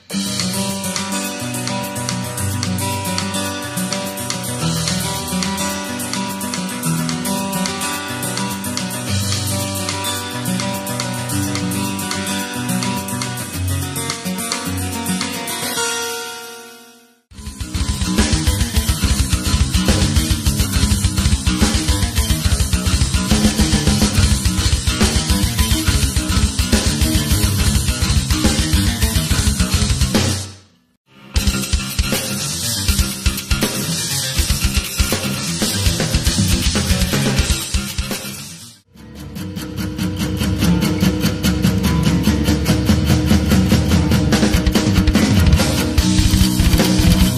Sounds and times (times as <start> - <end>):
Drum kit: 0.0 - 16.0, 17.3 - 38.8, 39.6 - 47.3
Bass drum: 17.3 - 30.5, 31.4 - 38.3, 41.7 - 47.3.